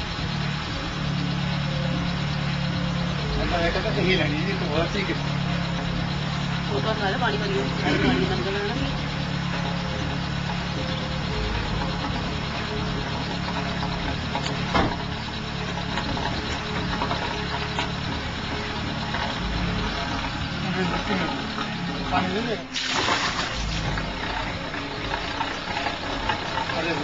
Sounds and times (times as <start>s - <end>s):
Car: 0.0s - 27.0s.